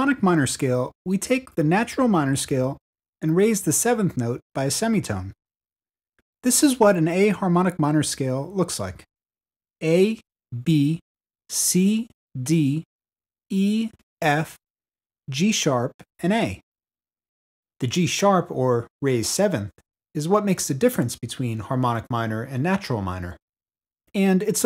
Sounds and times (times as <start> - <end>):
Speech: 0.0 - 5.4, 6.4 - 9.1, 9.8 - 12.9, 13.5 - 14.6, 15.3 - 16.6, 17.8 - 23.4, 24.1 - 24.6.